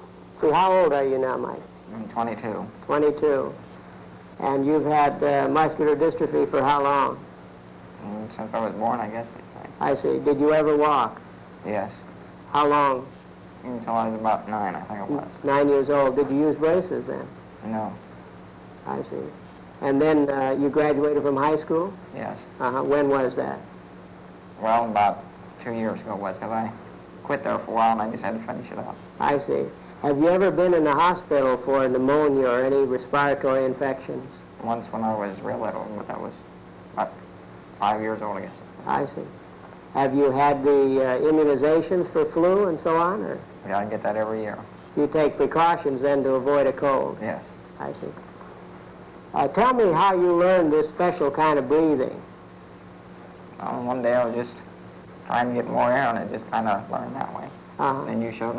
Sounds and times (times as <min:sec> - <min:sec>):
Speech: 0:00.4 - 0:03.6, 0:04.4 - 0:07.2, 0:08.0 - 0:18.0, 0:18.8 - 0:23.7, 0:24.6 - 0:36.4, 0:37.8 - 0:39.4, 0:40.0 - 0:48.2, 0:49.4 - 0:52.3, 0:53.6 - 0:54.6, 0:55.3 - 0:58.5.